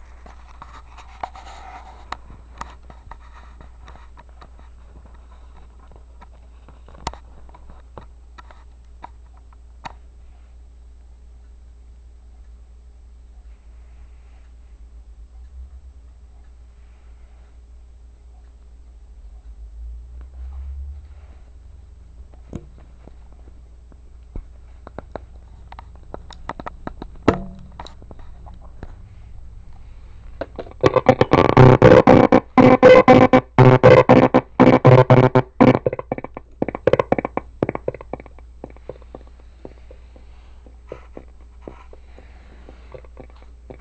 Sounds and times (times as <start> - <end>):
Radio: 29.8 - 43.8.